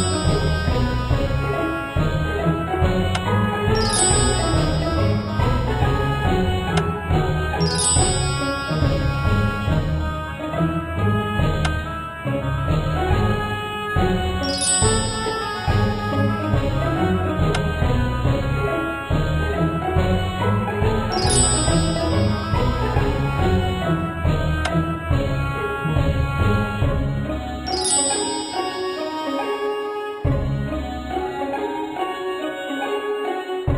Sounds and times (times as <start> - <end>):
Music: 0.0 - 33.7.